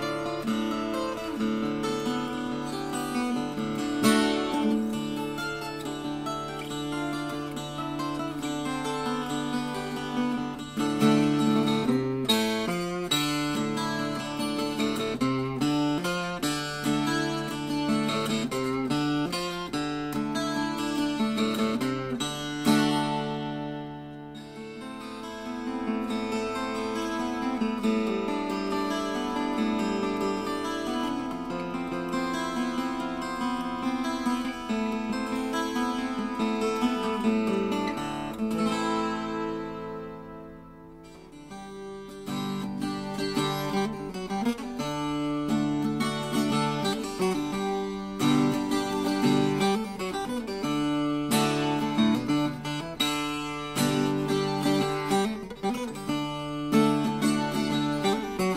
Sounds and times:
Plucked string instrument: 0.0 - 58.5.

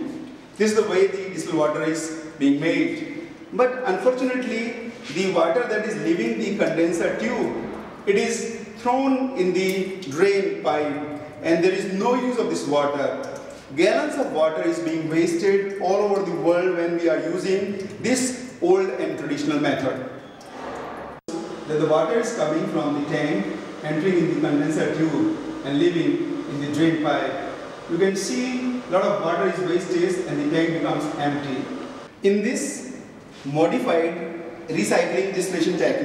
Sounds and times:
Speech: 0.0 - 20.1, 21.3 - 36.0.

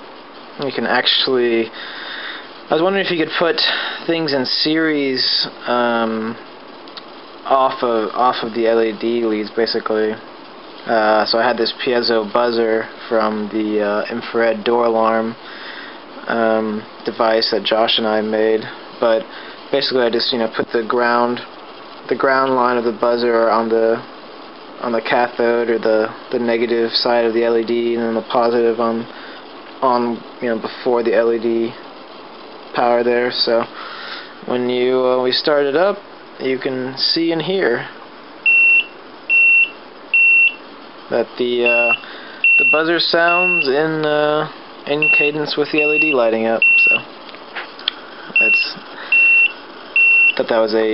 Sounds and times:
Inside, small room: 0.0 - 50.9
Speech: 0.6 - 1.8, 2.7 - 6.4, 7.4 - 10.2, 10.8 - 15.4, 16.2 - 21.5, 22.1 - 24.1, 24.8 - 29.1, 29.8 - 31.8, 32.8 - 33.7, 34.4 - 38.0, 41.1 - 42.0, 42.6 - 47.1, 48.4 - 48.9, 50.4 - 50.9
Buzzer: 38.5 - 40.6, 41.7 - 43.7, 45.0 - 47.0, 48.4 - 50.4.

